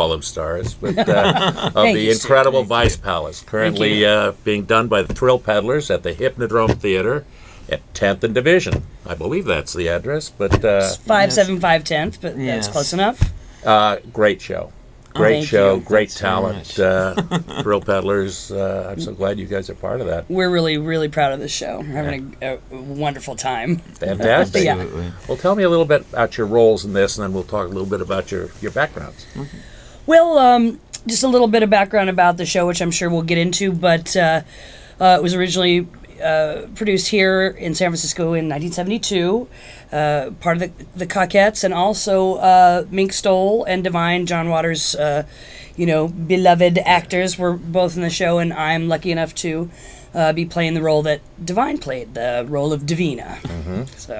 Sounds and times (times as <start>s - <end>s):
Speech: 0.0s - 7.0s, 10.2s - 13.2s, 13.9s - 20.2s, 23.6s - 31.4s, 51.6s - 54.1s.